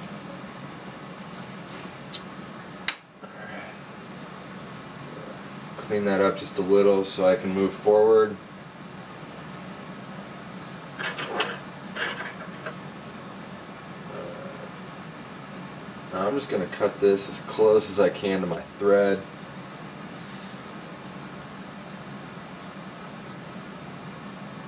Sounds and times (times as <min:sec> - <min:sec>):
Speech: 0:05.8 - 0:08.4, 0:16.1 - 0:19.3.